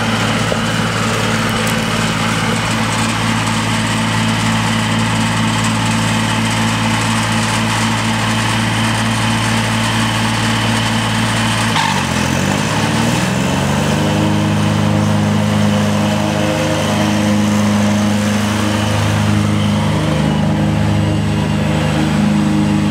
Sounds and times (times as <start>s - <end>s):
Lawn mower: 0.0s - 22.9s
Vehicle: 0.0s - 22.9s.